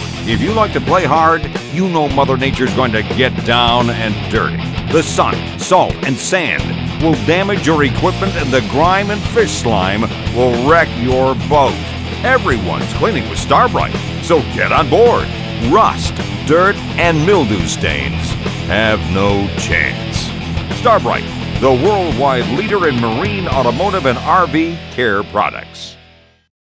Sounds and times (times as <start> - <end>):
Music: 0.0 - 26.5
Speech: 0.2 - 26.0.